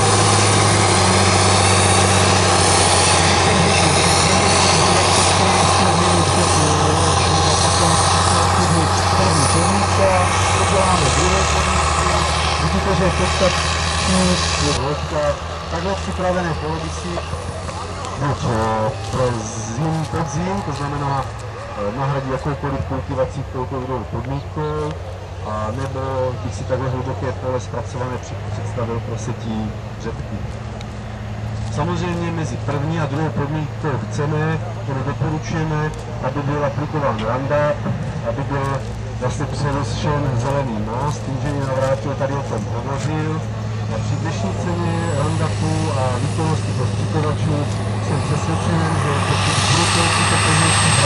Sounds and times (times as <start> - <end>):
Speech: 3.3 - 30.4, 31.7 - 51.0.